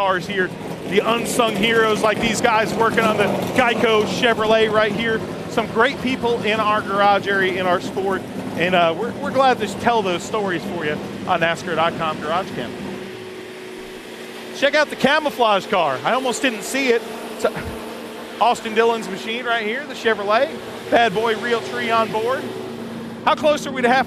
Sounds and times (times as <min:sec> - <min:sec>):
Car: 0:00.0 - 0:24.0.